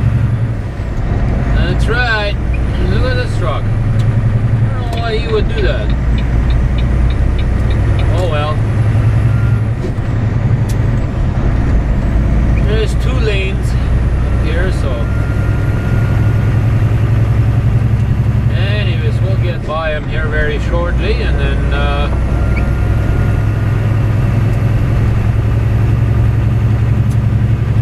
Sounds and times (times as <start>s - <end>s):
Truck: 0.0s - 27.8s
Speech: 1.6s - 3.7s, 4.7s - 6.0s, 8.1s - 8.6s, 12.6s - 13.8s, 14.4s - 15.1s, 18.5s - 22.1s.